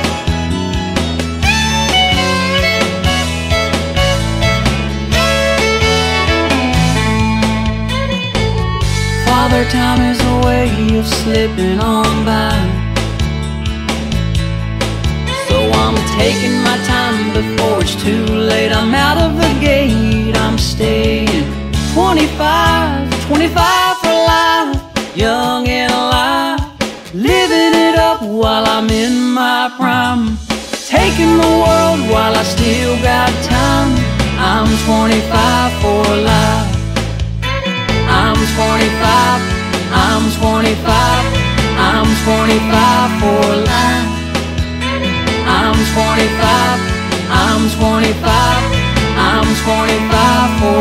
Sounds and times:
Independent music: 0:00.0 - 0:50.8.

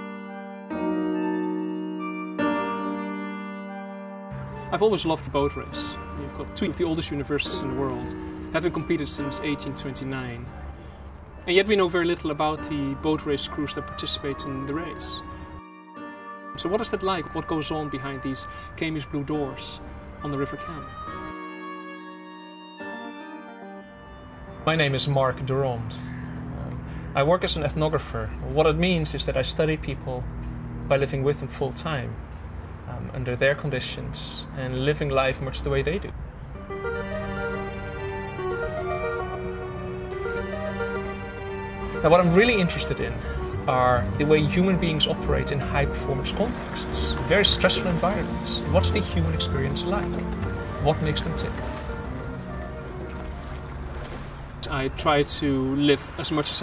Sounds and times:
Music: 0:00.0 - 0:29.8, 0:36.6 - 0:56.3
Speech: 0:04.7 - 0:10.5, 0:11.5 - 0:15.2, 0:16.6 - 0:20.9, 0:24.6 - 0:26.0, 0:26.6 - 0:30.2, 0:30.9 - 0:32.2, 0:32.9 - 0:36.2, 0:42.0 - 0:50.2, 0:50.8 - 0:51.6, 0:54.6 - 0:56.6.

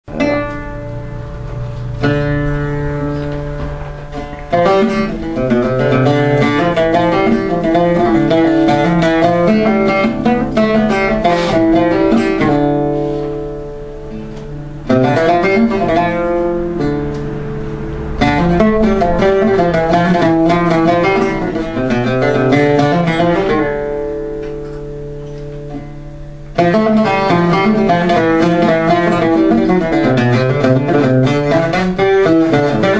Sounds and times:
Bowed string instrument: 0:00.0 - 0:32.9
Plucked string instrument: 0:00.0 - 0:32.9.

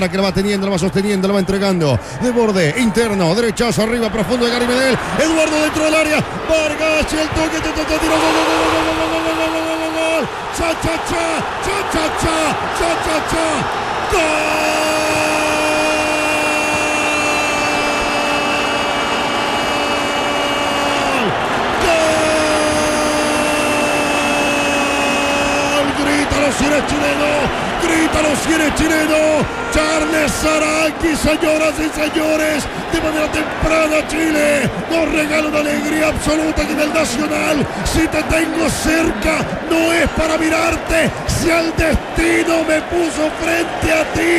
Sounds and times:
Speech: 0:00.0 - 0:17.2, 0:25.2 - 0:44.3.

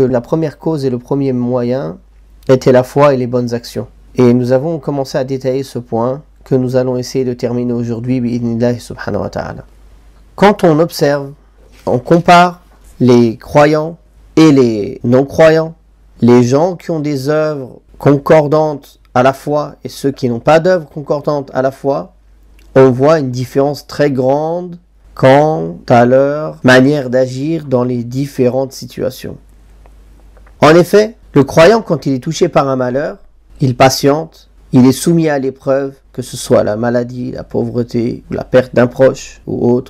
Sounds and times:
Speech: 0:00.0 - 0:09.7, 0:10.4 - 0:29.5, 0:30.6 - 0:39.8.

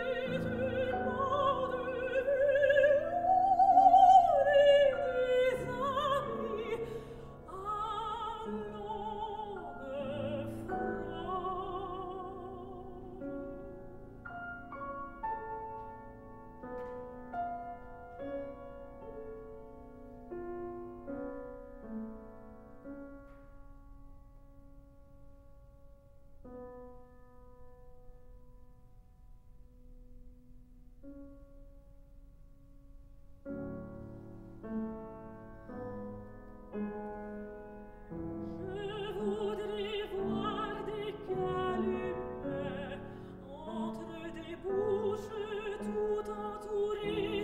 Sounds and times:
Piano: 0:00.0 - 0:47.4.

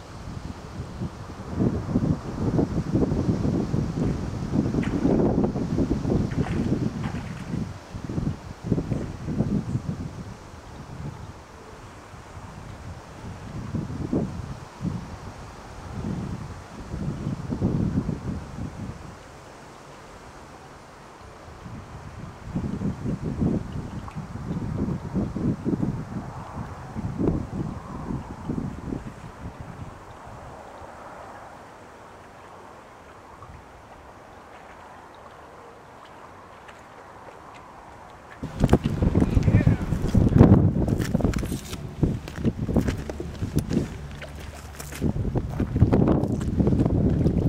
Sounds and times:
Outside, rural or natural: 0:00.0 - 0:47.4.

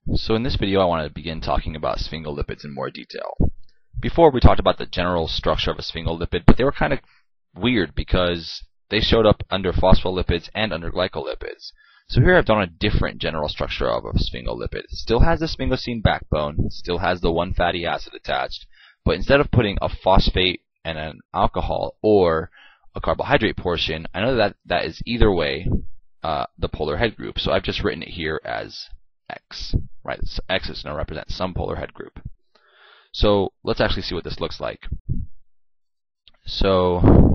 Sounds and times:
Speech: 0:00.1 - 0:07.0, 0:07.6 - 0:32.3, 0:33.1 - 0:35.1, 0:36.3 - 0:37.3.

